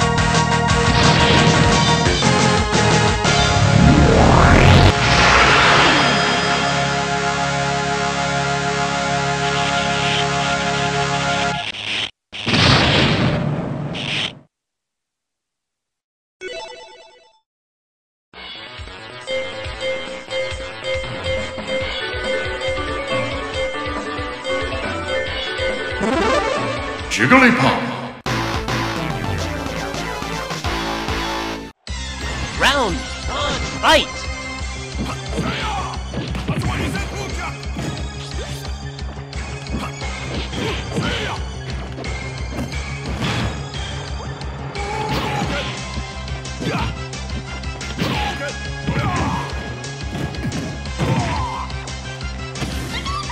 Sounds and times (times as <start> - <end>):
Music: 0.0 - 11.7, 18.4 - 53.3.